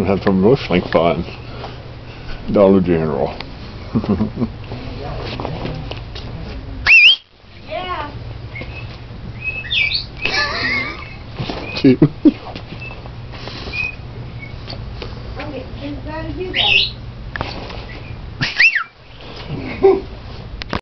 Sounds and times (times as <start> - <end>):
Whistling: 6.9 - 7.2, 8.6 - 10.1, 13.7 - 14.6, 17.9 - 19.0.